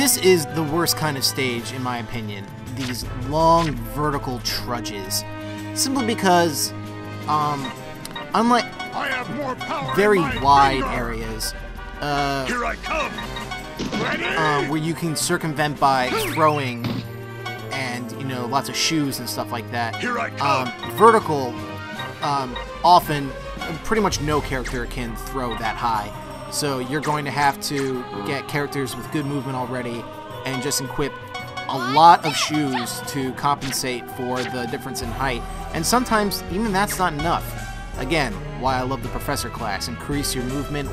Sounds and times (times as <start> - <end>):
Speech: 0.0 - 6.7, 7.3 - 7.8, 8.4 - 13.2, 14.0 - 16.9, 17.7 - 21.6, 22.2 - 31.1, 31.7 - 40.9
Music: 0.0 - 40.9.